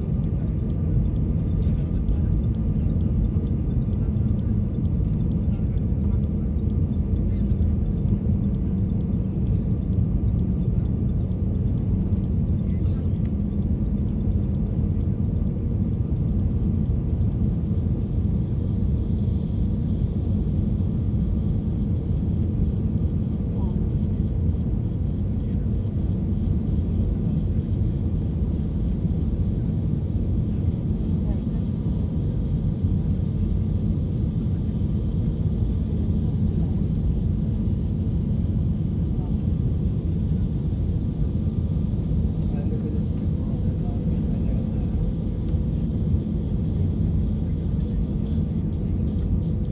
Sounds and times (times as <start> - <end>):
Speech: 23.5 - 24.3, 30.5 - 32.4, 39.0 - 39.5, 42.4 - 45.2.